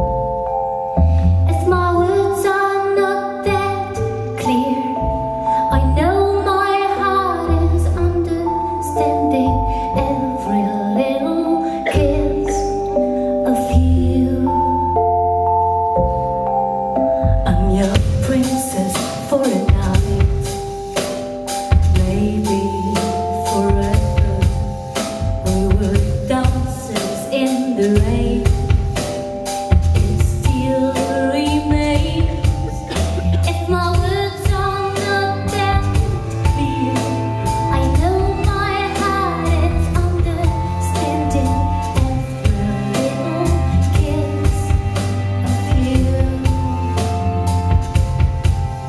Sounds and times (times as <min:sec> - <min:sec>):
Music: 0:00.0 - 0:48.8.